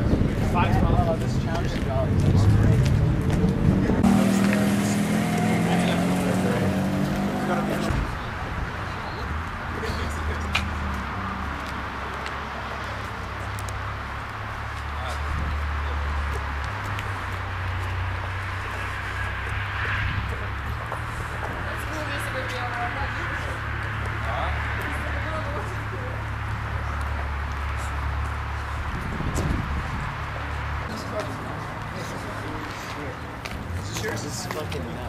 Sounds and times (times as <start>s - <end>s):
Car: 0.0s - 35.0s.